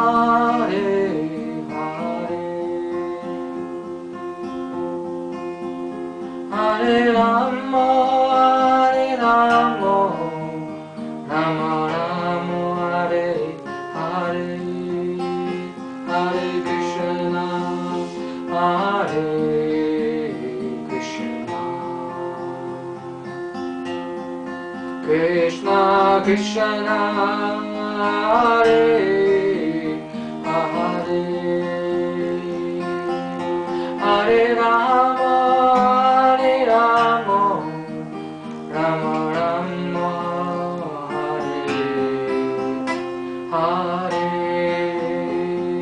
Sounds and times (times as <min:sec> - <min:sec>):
Mantra: 0:00.0 - 0:04.0, 0:06.0 - 0:23.3, 0:25.0 - 0:45.8.